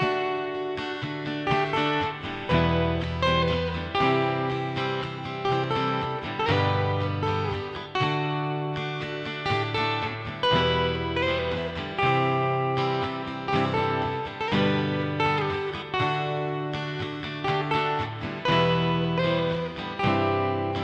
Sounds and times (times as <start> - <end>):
Acoustic guitar: 0.0 - 20.8
Electric guitar: 0.0 - 20.8
Strum: 0.0 - 20.8.